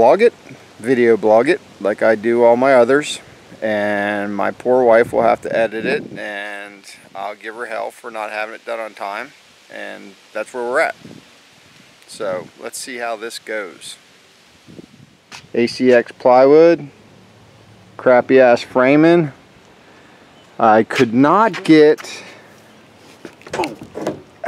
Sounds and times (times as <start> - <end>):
Speech: 0.0 - 11.0, 12.1 - 14.0, 15.6 - 16.9, 18.0 - 19.4, 20.6 - 22.3
Outside, rural or natural: 0.0 - 24.4.